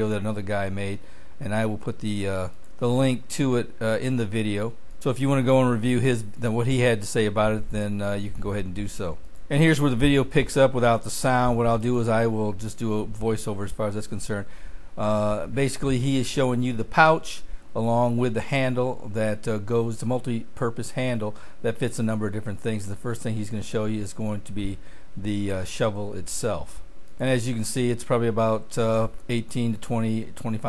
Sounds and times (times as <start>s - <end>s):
Speech: 0.0s - 30.6s.